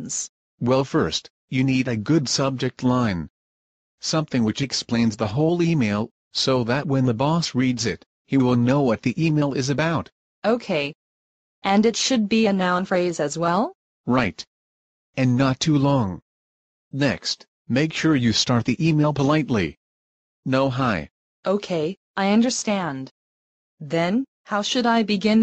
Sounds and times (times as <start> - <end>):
Speech: 0.0 - 3.3, 4.0 - 11.0, 11.7 - 14.5, 15.2 - 16.2, 17.0 - 19.8, 20.5 - 23.1, 23.8 - 25.4.